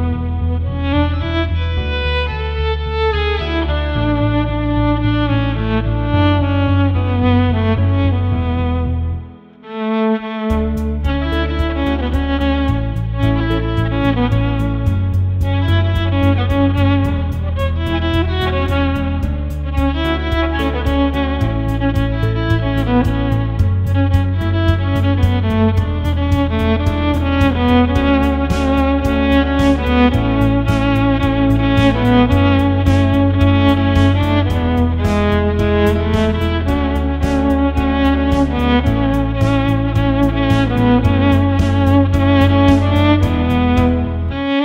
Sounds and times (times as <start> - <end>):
Violin, fiddle: 0.0 - 44.6.